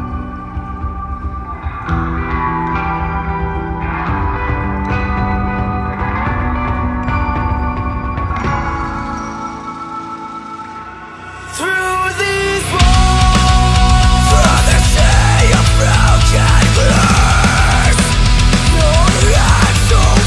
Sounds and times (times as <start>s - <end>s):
Rhythm and blues: 0.0s - 20.2s.